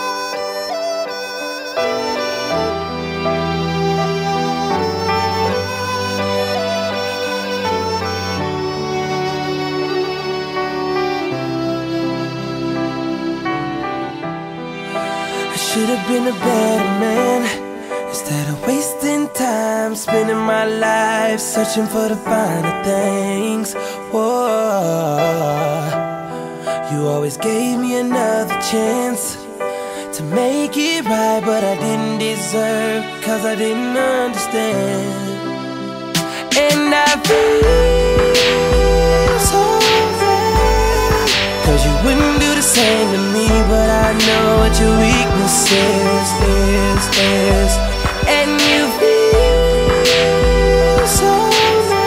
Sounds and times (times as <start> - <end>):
Music: 0.0 - 52.0.